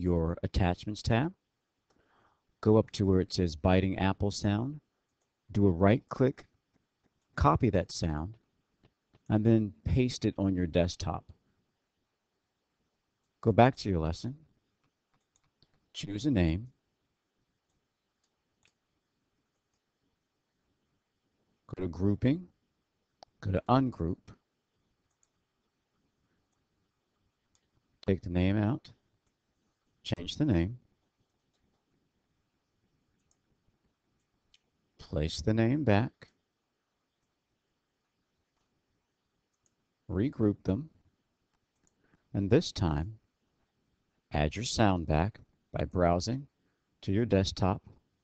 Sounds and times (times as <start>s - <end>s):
Speech: 0.0s - 1.4s, 2.6s - 4.8s, 5.5s - 6.5s, 7.4s - 8.4s, 9.3s - 11.3s, 13.4s - 14.4s, 16.0s - 16.8s, 21.7s - 22.5s, 23.4s - 24.4s, 28.0s - 29.0s, 30.0s - 30.8s, 35.0s - 36.3s, 40.1s - 41.0s, 42.4s - 43.2s, 44.3s - 48.0s.